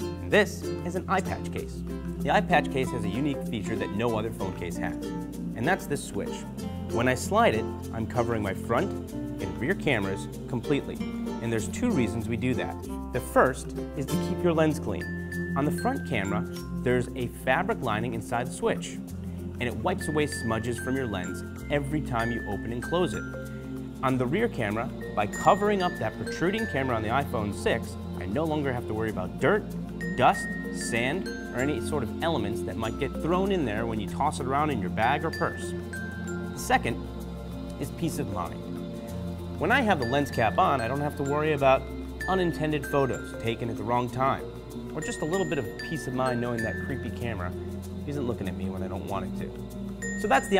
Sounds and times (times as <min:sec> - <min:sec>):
Music: 0:00.0 - 0:50.5
Speech: 0:00.2 - 0:05.0, 0:05.6 - 0:19.0, 0:19.6 - 0:23.2, 0:24.0 - 0:35.7, 0:36.6 - 0:37.0, 0:37.8 - 0:38.6, 0:39.6 - 0:44.4, 0:45.0 - 0:49.6, 0:50.2 - 0:50.5.